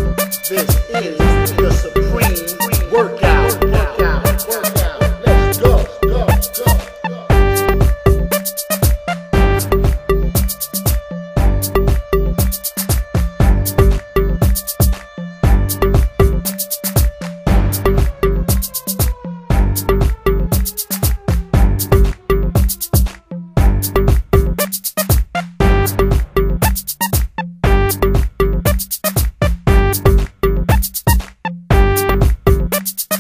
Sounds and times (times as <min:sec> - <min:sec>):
Music: 0:00.0 - 0:33.2.